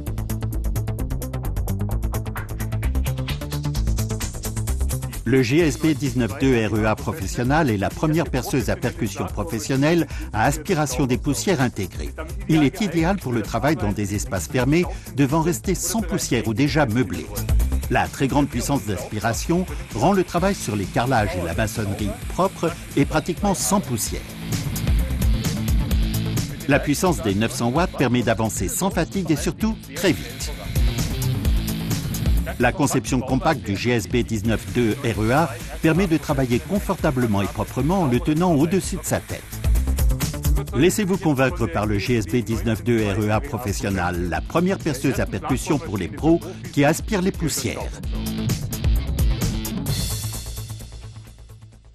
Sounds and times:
Music: 0.0 - 51.9
Speech: 5.2 - 24.3, 26.5 - 30.8, 32.5 - 39.5, 40.6 - 48.0.

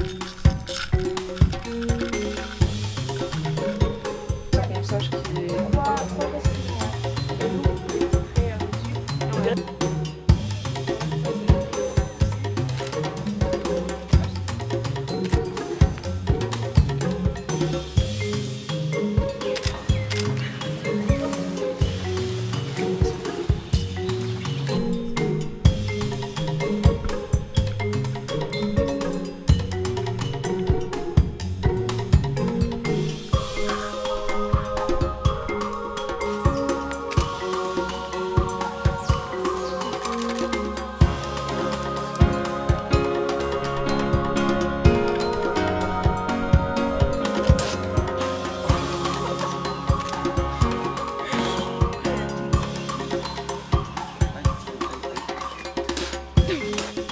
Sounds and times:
Music: 0.0 - 57.1
Speech: 4.6 - 7.1, 8.3 - 9.6.

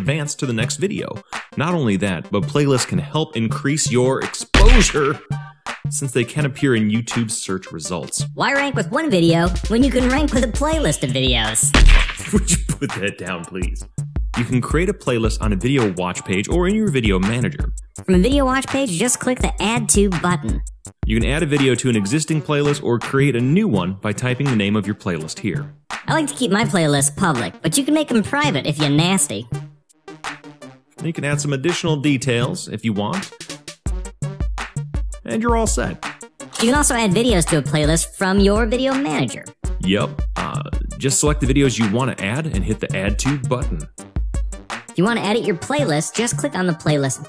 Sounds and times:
Speech: 0.0 - 5.3, 5.9 - 13.8, 14.4 - 29.5, 31.0 - 33.3, 35.3 - 36.0, 36.6 - 43.9, 45.0 - 47.2
Music: 0.0 - 47.2.

